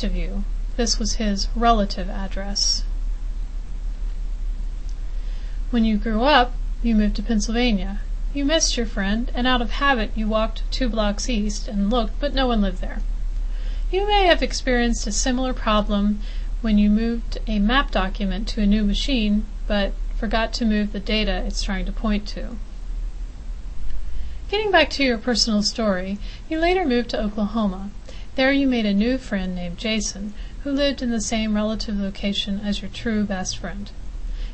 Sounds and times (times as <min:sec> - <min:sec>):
Speech: 0:00.0 - 0:02.9, 0:05.7 - 0:13.0, 0:13.9 - 0:22.6, 0:24.5 - 0:34.0.